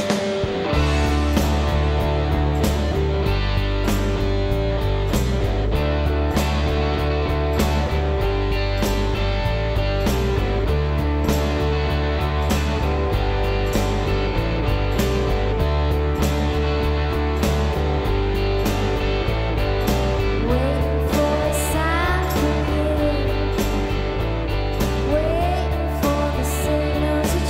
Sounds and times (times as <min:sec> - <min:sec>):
Rhythm and blues: 0:00.0 - 0:27.4.